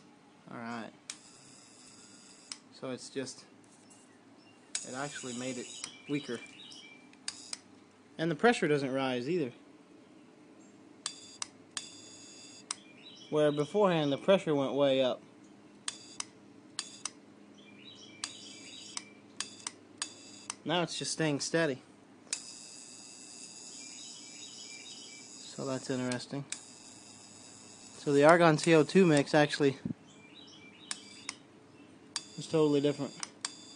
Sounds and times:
Speech: 0.5 - 1.0, 2.8 - 3.5, 4.8 - 6.4, 8.2 - 9.6, 13.3 - 15.2, 20.7 - 21.8, 25.5 - 26.5, 28.0 - 30.0, 32.4 - 33.2
Bird vocalization, bird call, bird song: 3.8 - 7.1, 12.8 - 14.2, 17.5 - 19.2, 23.7 - 25.3, 30.0 - 32.0.

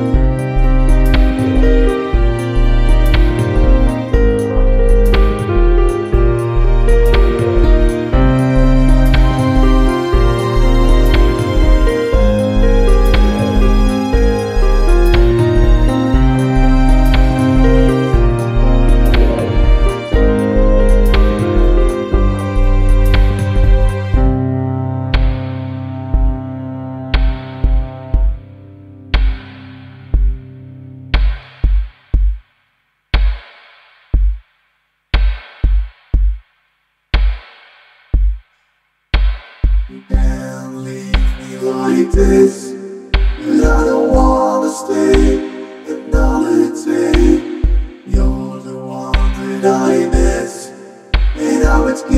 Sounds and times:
Synthesizer: 0.0 - 31.3, 39.9 - 52.1
Electronic music: 0.0 - 31.9, 39.8 - 52.1
Background music: 0.0 - 32.4, 39.2 - 52.1.

